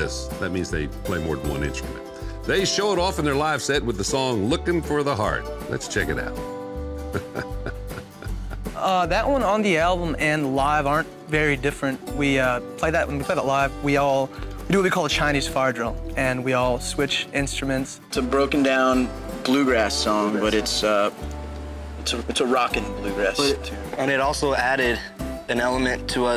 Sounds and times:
Speech: 0.0 - 6.3, 22.1 - 26.3
Music: 0.0 - 26.3.

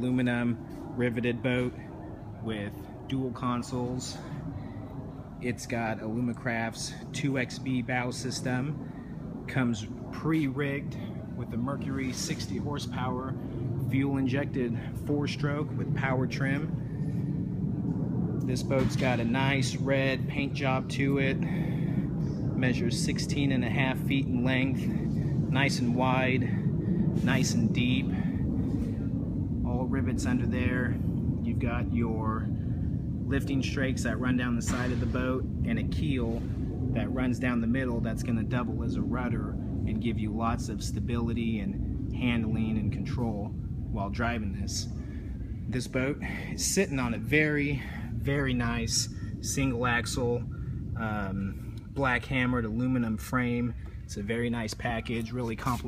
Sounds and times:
Speech: 0.0 - 4.2, 5.4 - 8.8, 9.5 - 16.7, 18.5 - 21.5, 22.6 - 26.6, 27.2 - 28.2, 29.6 - 32.5, 33.3 - 45.0, 45.7 - 55.8.

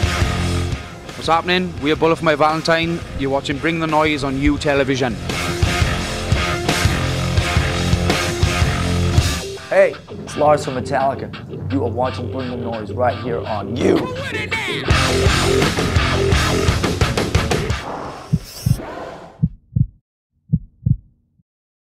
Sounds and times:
Heart sounds, heartbeat: 18.3 - 18.8, 19.4 - 21.1.

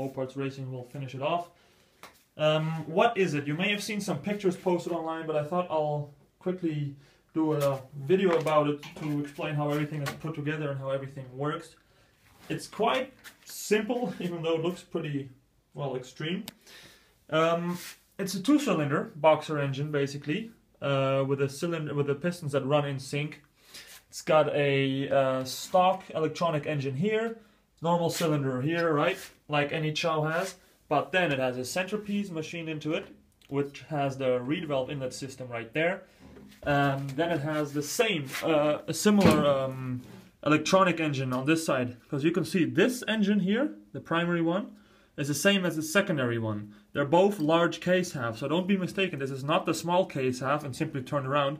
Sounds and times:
Speech: 0.0 - 1.6, 2.4 - 11.8, 12.4 - 16.5, 17.3 - 23.5, 24.1 - 51.5.

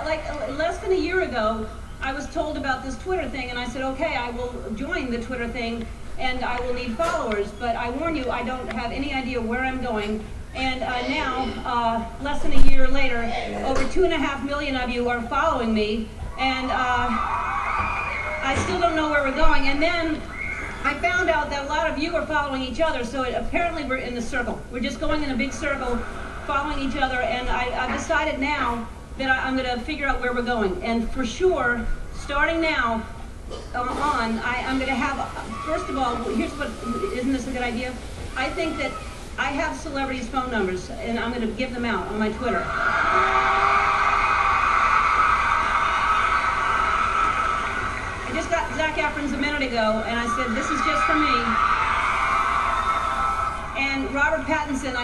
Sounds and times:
Female speech, woman speaking: 0.0 - 17.2, 18.4 - 33.1, 33.8 - 42.7, 48.3 - 51.6, 53.8 - 55.0
Narration, monologue: 0.0 - 17.2, 18.4 - 42.8, 48.3 - 51.6, 53.7 - 55.0.

